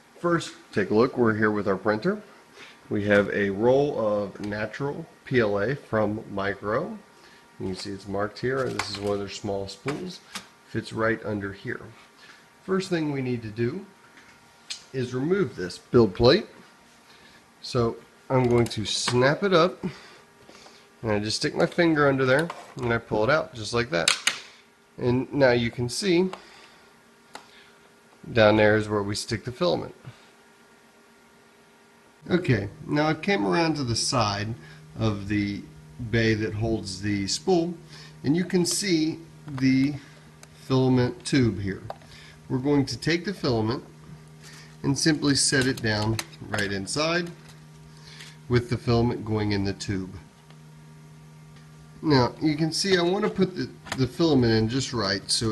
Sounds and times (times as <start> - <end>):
Speech: 0.2 - 2.3, 2.9 - 12.0, 12.6 - 13.9, 14.7 - 16.6, 17.6 - 20.0, 21.0 - 24.2, 25.0 - 26.4, 28.2 - 30.1, 32.3 - 41.9, 42.5 - 43.9, 44.8 - 47.4, 48.5 - 50.3, 52.0 - 55.5.